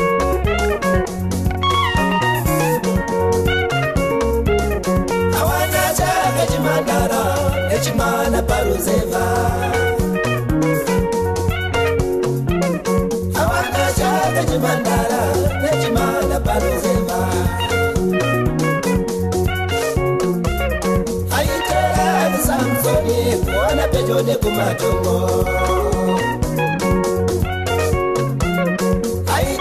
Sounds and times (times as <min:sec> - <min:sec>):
Music: 0:00.0 - 0:29.6.